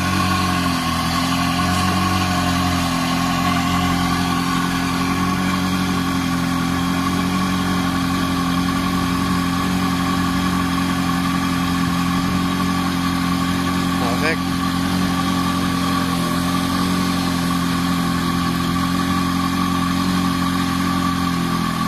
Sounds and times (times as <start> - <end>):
Car: 0.0 - 21.8
Idling: 0.0 - 21.8
Medium engine (mid frequency): 0.0 - 21.8
Speech: 14.0 - 14.4.